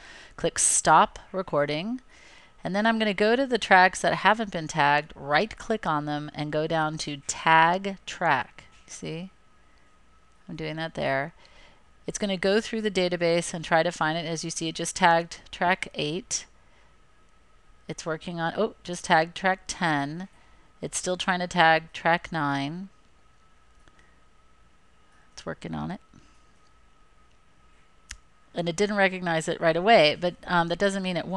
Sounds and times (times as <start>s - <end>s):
Speech: 0.4s - 2.0s, 2.6s - 9.3s, 10.5s - 11.4s, 12.1s - 16.5s, 17.9s - 22.9s, 25.4s - 26.0s, 28.5s - 31.3s.